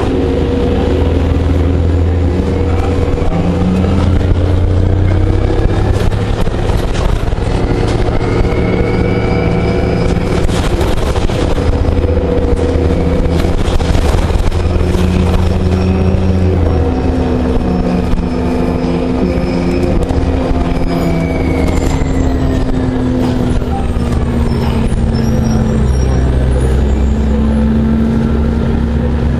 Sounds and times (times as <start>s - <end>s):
Bus: 0.0s - 29.4s.